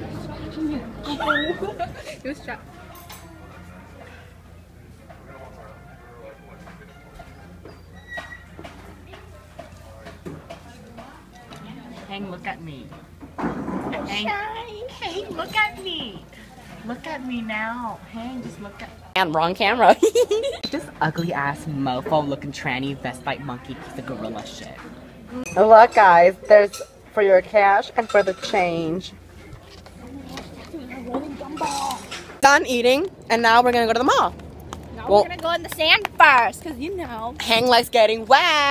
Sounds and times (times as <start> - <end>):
Inside, public space: 0.0 - 38.7.